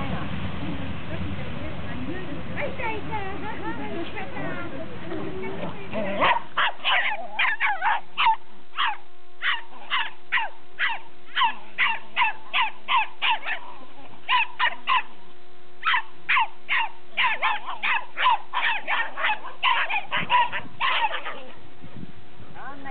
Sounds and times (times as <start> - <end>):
Speech: 0.0 - 6.3, 22.6 - 22.9
Outside, urban or manmade: 0.0 - 22.9
Bark: 6.2 - 13.7, 14.3 - 15.1, 15.8 - 21.5
Bow-wow: 6.2 - 13.7, 14.3 - 15.1, 15.8 - 21.6.